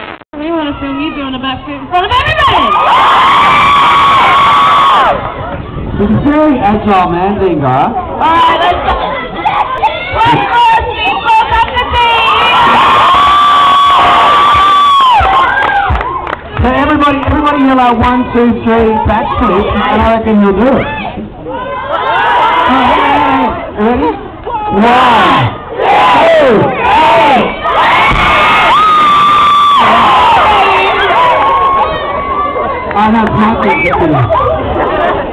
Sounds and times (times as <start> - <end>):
Outside, urban or manmade: 0.0 - 35.3.